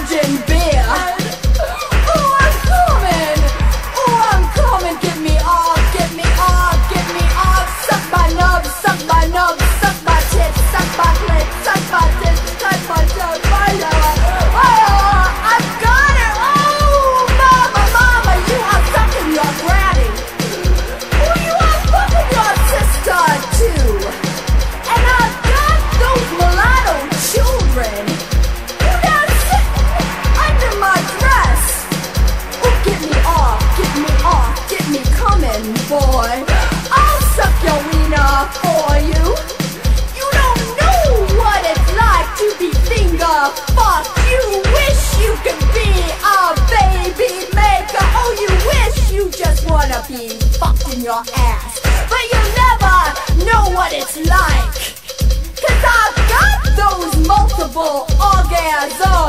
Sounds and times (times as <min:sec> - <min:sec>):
Music: 0:00.0 - 0:59.2.